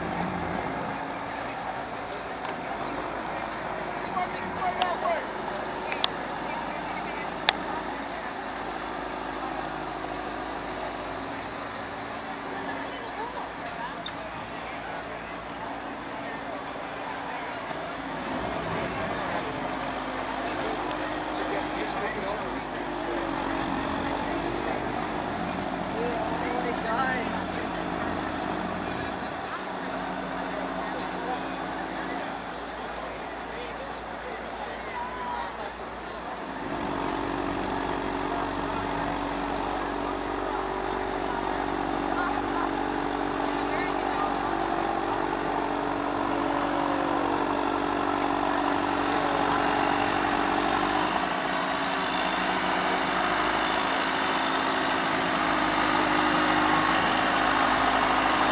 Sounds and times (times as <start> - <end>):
Speech: 0.0 - 52.4
Motorboat, speedboat: 0.0 - 58.5.